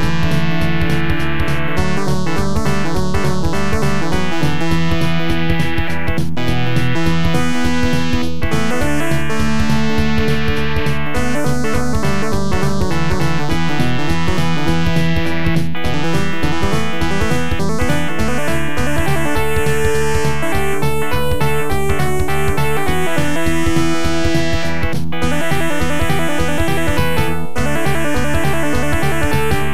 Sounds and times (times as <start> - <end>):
Soundtrack music: 0.0 - 29.7.